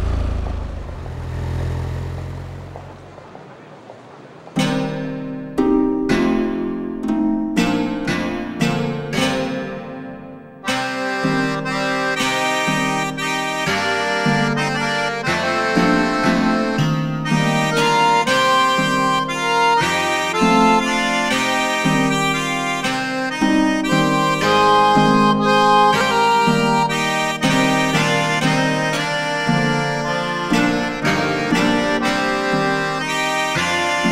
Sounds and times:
Music: 0:04.6 - 0:34.1.

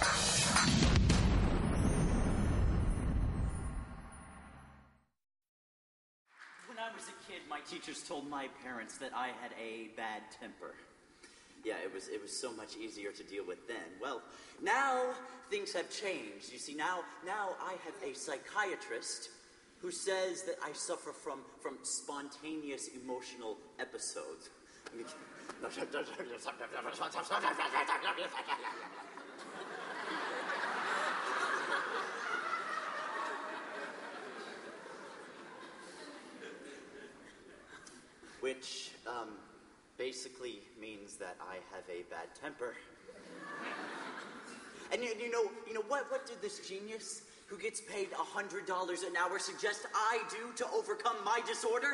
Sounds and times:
Narration, monologue: 0:06.3 - 0:32.1, 0:36.1 - 0:51.9.

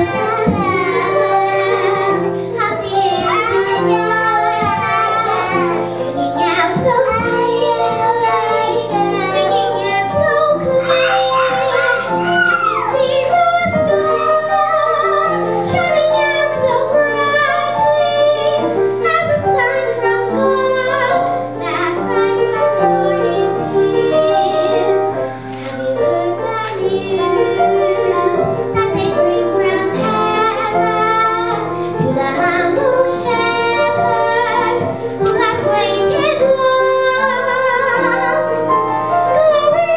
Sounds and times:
Child singing: 0:00.0 - 0:38.6, 0:39.3 - 0:39.9
Music: 0:00.0 - 0:39.9.

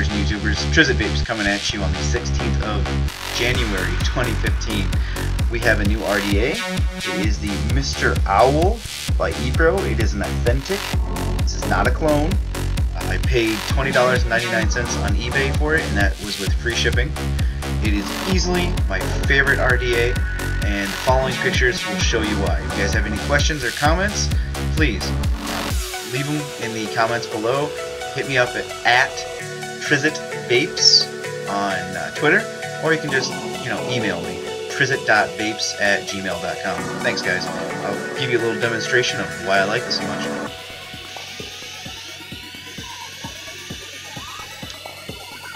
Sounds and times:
Speech: 0:00.0 - 0:10.9, 0:11.5 - 0:12.4, 0:13.0 - 0:25.2, 0:26.0 - 0:40.5
Music: 0:00.0 - 0:45.5.

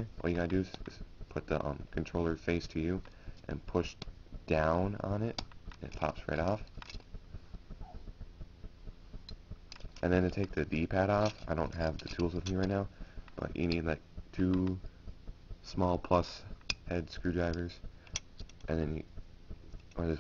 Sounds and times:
Speech: 0:00.0 - 0:06.7, 0:10.0 - 0:14.8, 0:15.6 - 0:17.8, 0:18.7 - 0:19.1, 0:20.0 - 0:20.2.

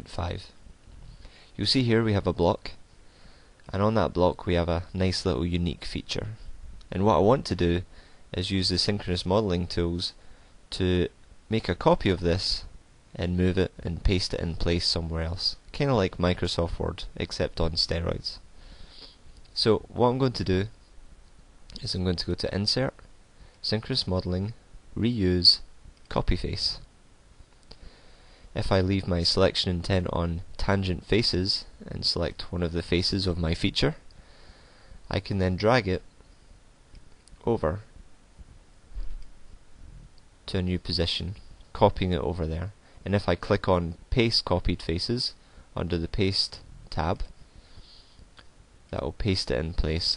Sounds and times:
Speech: 0:00.0 - 0:00.6, 0:01.6 - 0:02.8, 0:03.7 - 0:18.4, 0:19.6 - 0:20.8, 0:21.7 - 0:23.0, 0:23.6 - 0:26.9, 0:28.6 - 0:34.0, 0:35.1 - 0:36.1, 0:37.4 - 0:37.9, 0:40.5 - 0:47.4, 0:48.9 - 0:50.1.

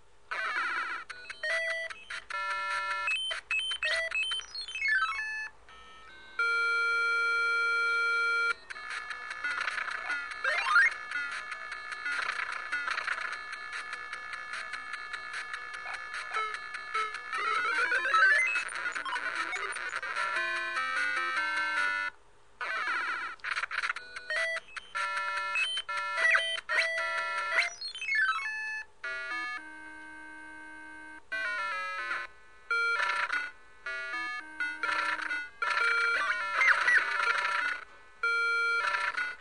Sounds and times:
Sound effect: 0:08.7 - 0:22.0, 0:34.7 - 0:37.9.

